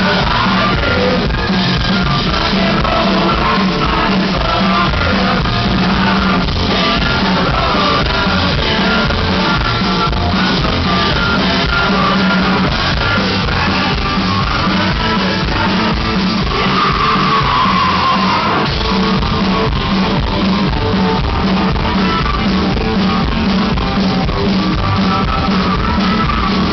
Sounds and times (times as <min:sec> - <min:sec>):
Music: 0:00.0 - 0:26.7.